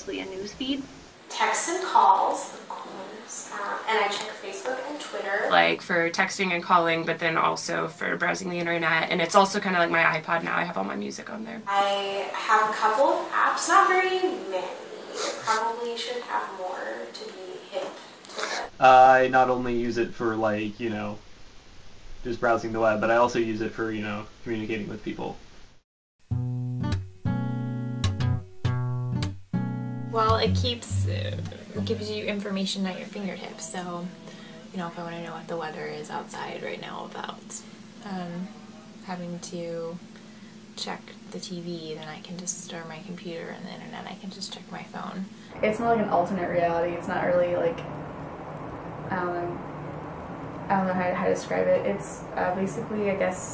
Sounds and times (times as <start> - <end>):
Speech: 0.0 - 21.2, 22.3 - 25.4, 30.2 - 40.0, 40.8 - 47.9, 49.1 - 49.6, 50.7 - 53.5.